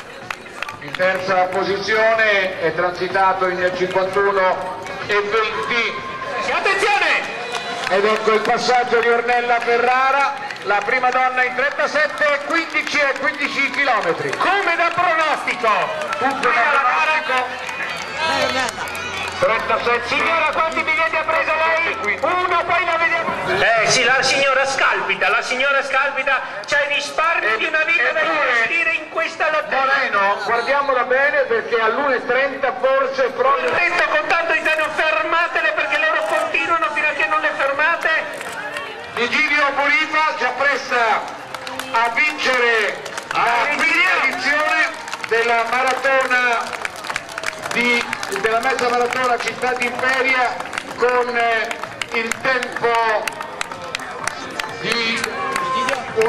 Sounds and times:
Outside, urban or manmade: 0:00.0 - 0:56.2
Run: 0:00.0 - 0:56.2.

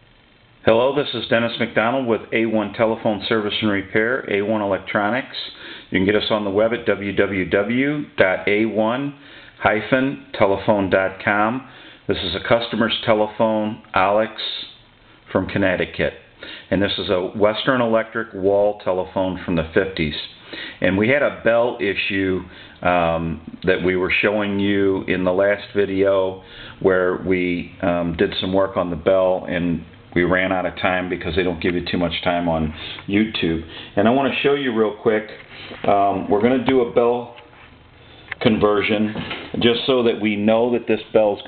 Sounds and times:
Speech: 0:00.6 - 0:37.5, 0:38.3 - 0:41.4.

